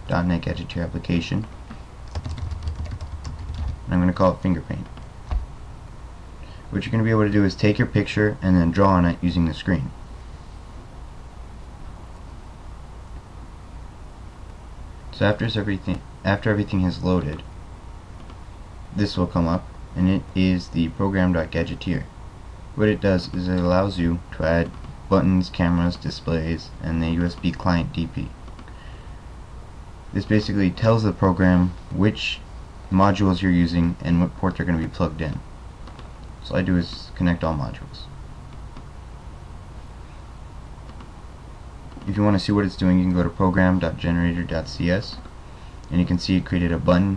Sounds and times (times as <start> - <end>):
Speech: 0.0 - 1.6, 3.9 - 5.0, 6.7 - 10.0, 15.2 - 17.5, 18.9 - 22.1, 22.8 - 28.4, 30.1 - 35.5, 36.4 - 38.2, 42.0 - 45.2, 45.9 - 47.1.